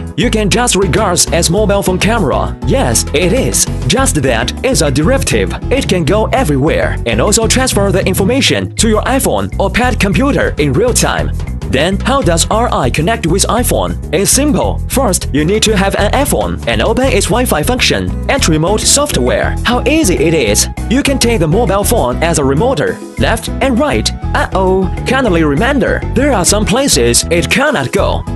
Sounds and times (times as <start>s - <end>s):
Music: 0.0s - 28.3s
Speech: 0.2s - 28.3s.